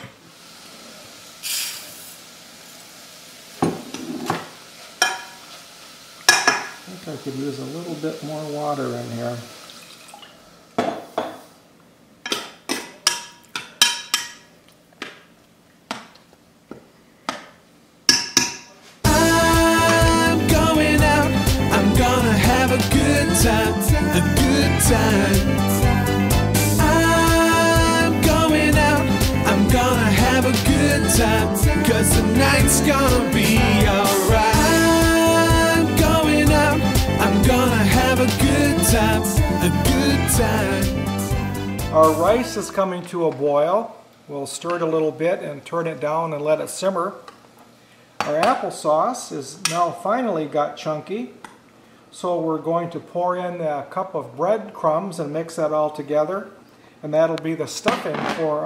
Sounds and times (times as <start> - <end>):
Sizzle: 0.0 - 10.8, 19.0 - 24.5, 25.3 - 41.6.